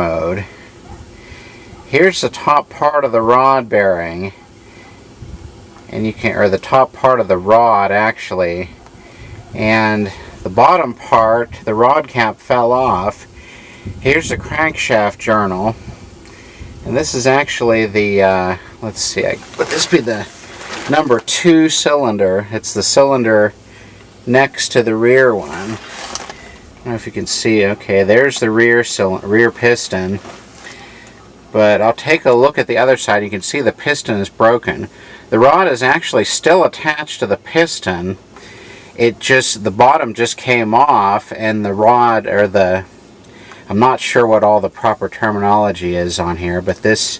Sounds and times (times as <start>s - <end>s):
Speech: 0.0s - 0.5s, 1.9s - 4.4s, 5.9s - 8.8s, 9.6s - 13.3s, 14.0s - 15.8s, 16.8s - 23.6s, 24.2s - 26.0s, 26.8s - 30.4s, 31.5s - 38.2s, 39.0s - 42.9s, 43.7s - 47.1s.